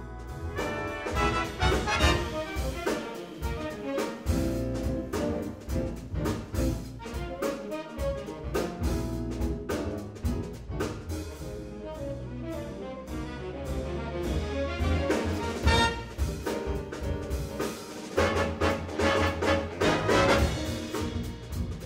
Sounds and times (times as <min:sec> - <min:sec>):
Trombone: 0:00.0 - 0:21.8.